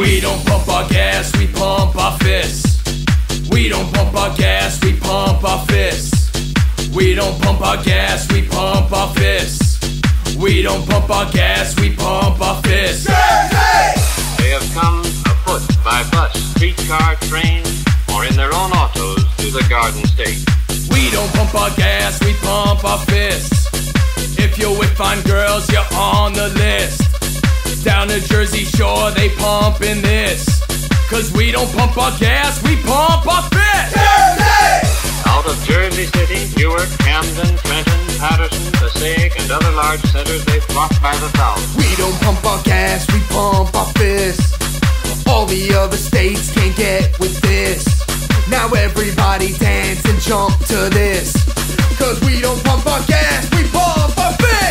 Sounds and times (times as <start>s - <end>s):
Music: 0.0s - 54.7s
Speech: 14.4s - 23.7s, 24.4s - 27.1s, 27.9s - 34.2s, 35.2s - 44.4s, 45.3s - 51.4s, 52.0s - 54.7s.